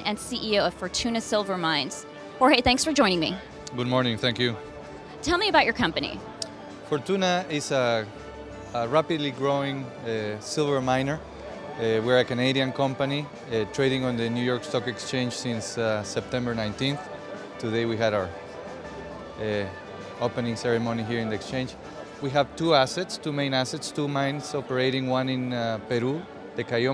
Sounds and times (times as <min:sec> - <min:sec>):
Music: 0:00.0 - 0:26.9
Speech: 0:06.9 - 0:08.0, 0:11.8 - 0:17.0, 0:17.6 - 0:18.3, 0:19.4 - 0:26.9.